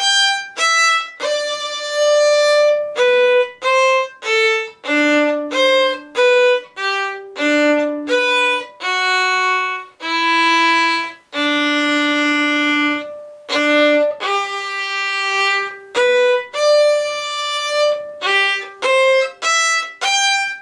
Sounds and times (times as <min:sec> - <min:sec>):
Violin, fiddle: 0:00.0 - 0:20.6.